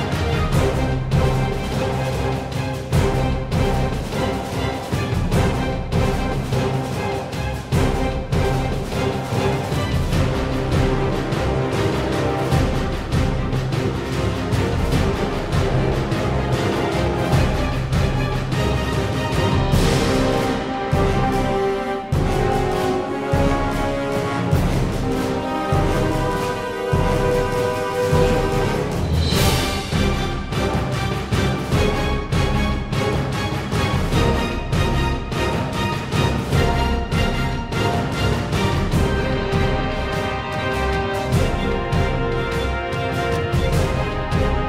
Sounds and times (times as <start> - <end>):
Music: 0.0 - 44.6.